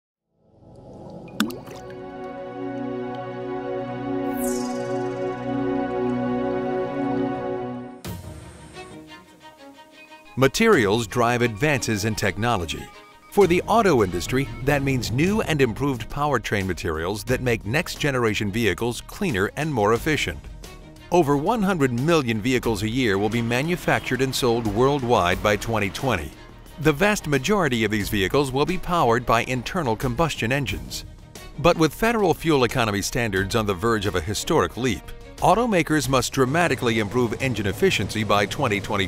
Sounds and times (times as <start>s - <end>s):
Music: 0.3s - 39.0s.